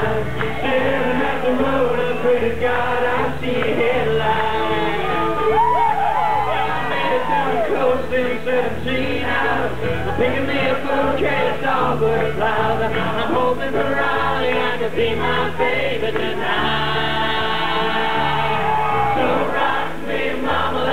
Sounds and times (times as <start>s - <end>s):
Music: 0.0s - 20.9s.